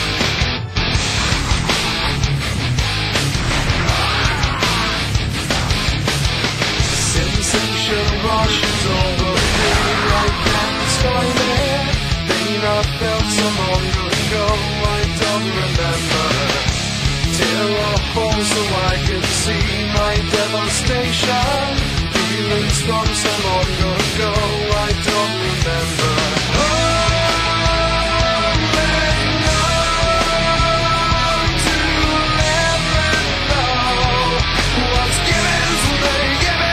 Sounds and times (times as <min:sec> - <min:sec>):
Music: 0:00.0 - 0:36.7.